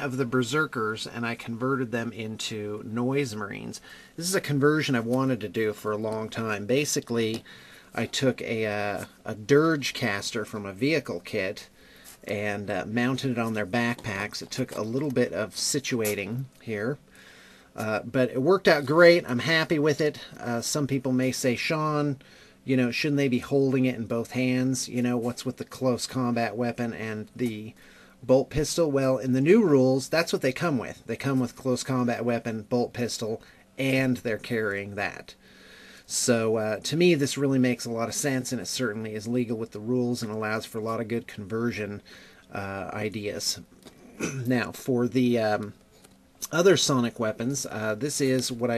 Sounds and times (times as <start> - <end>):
Speech: 0.0 - 17.0, 17.8 - 35.4, 36.1 - 45.8, 46.4 - 48.7.